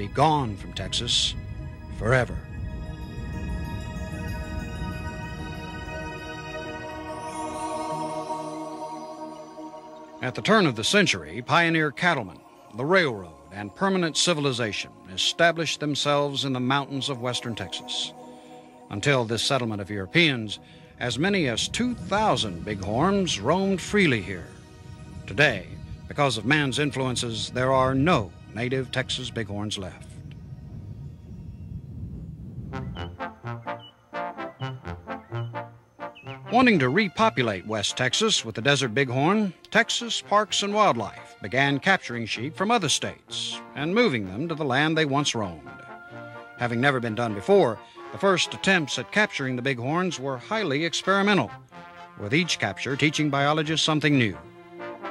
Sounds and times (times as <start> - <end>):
Speech: 0.0 - 1.4, 2.0 - 2.4, 10.2 - 18.1, 18.9 - 24.5, 25.3 - 30.1, 36.5 - 45.8, 46.6 - 51.5, 52.2 - 54.4
Music: 0.0 - 55.1.